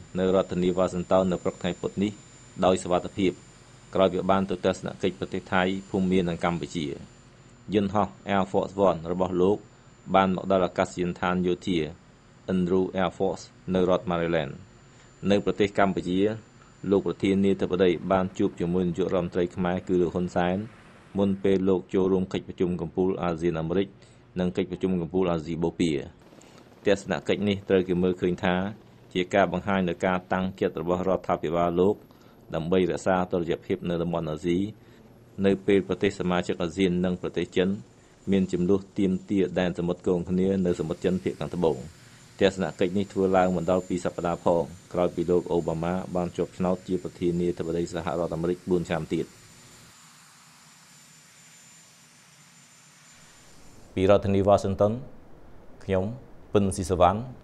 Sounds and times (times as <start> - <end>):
Speech: 0.0 - 3.4, 4.0 - 7.1, 7.7 - 26.2, 26.9 - 34.8, 35.4 - 49.3, 54.0 - 55.1, 55.8 - 57.4.